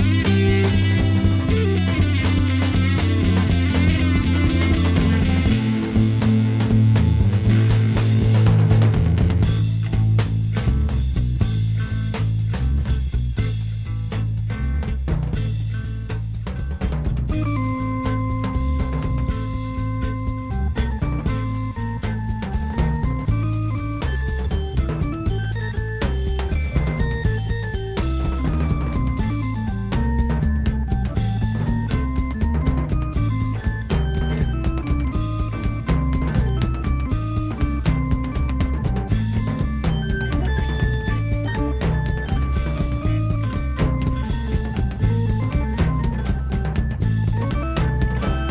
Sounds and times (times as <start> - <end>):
Rock music: 0.0 - 48.5.